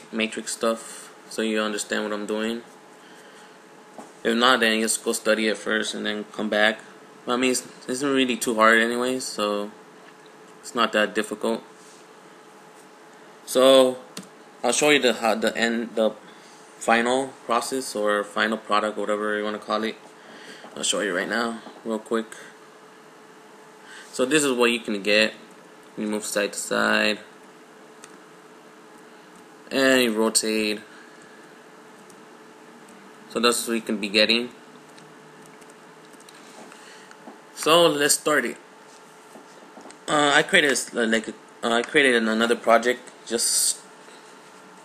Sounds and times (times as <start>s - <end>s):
Speech: 0.1s - 2.7s, 4.2s - 9.8s, 10.6s - 11.7s, 13.5s - 16.2s, 16.8s - 20.0s, 20.8s - 22.5s, 24.1s - 25.4s, 26.0s - 27.3s, 29.7s - 30.9s, 33.3s - 34.6s, 37.6s - 38.6s, 40.1s - 43.9s.